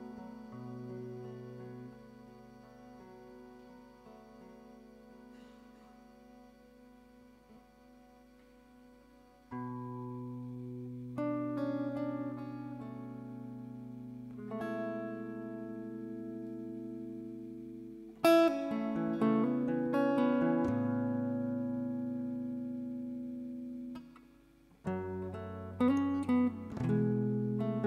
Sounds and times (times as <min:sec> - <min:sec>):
Acoustic guitar: 0:00.0 - 0:27.8.